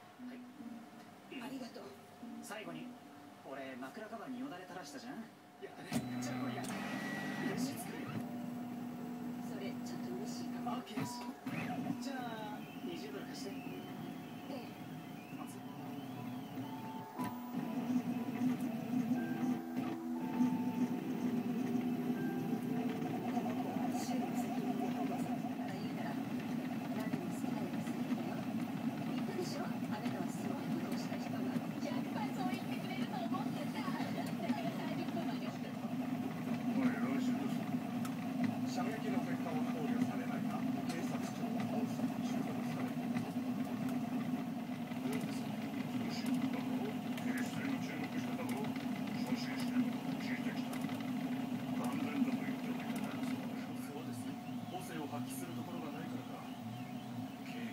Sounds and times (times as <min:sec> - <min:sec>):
Speech: 0:09.4 - 0:16.4, 0:22.7 - 0:36.0, 0:36.6 - 0:37.7, 0:38.6 - 0:43.4, 0:44.9 - 0:56.8, 0:57.4 - 0:57.7.